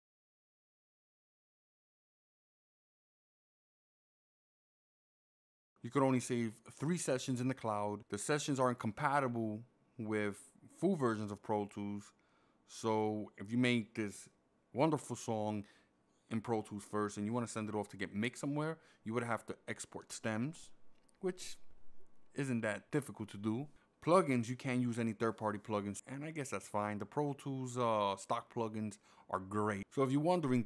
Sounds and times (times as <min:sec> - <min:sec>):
Speech: 0:05.8 - 0:15.7, 0:16.3 - 0:21.7, 0:22.4 - 0:30.6.